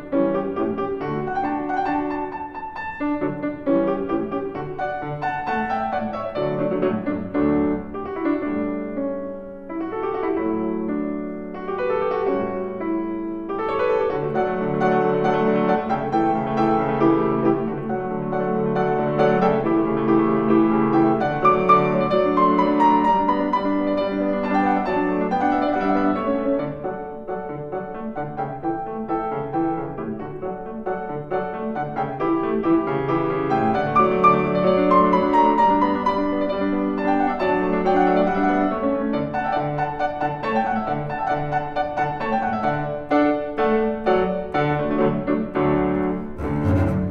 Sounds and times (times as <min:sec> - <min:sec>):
Piano: 0:00.0 - 0:47.1.